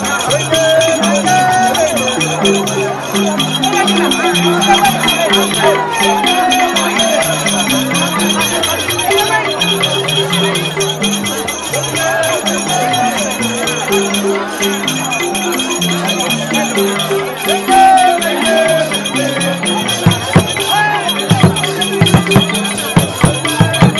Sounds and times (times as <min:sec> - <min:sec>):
Music: 0:00.0 - 0:23.9
Speech: 0:00.0 - 0:23.9.